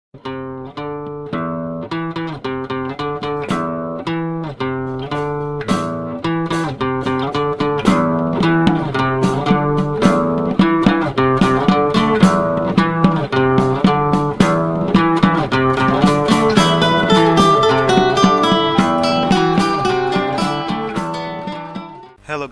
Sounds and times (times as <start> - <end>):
Blues: 0.2 - 22.2.